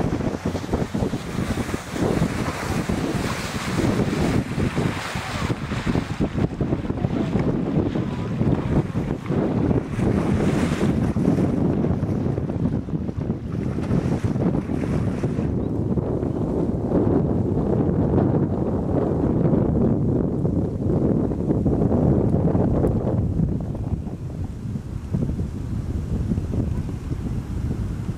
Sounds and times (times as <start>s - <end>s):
Boat, Water vehicle: 0.0s - 28.1s.